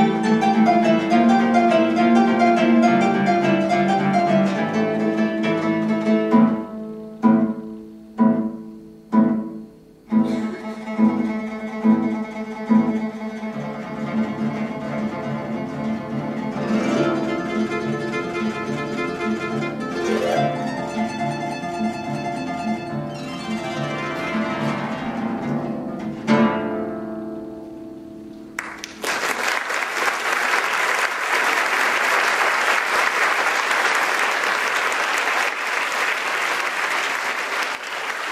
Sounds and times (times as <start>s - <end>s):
Bowed string instrument: 0.0s - 28.5s
Harp: 0.0s - 28.5s.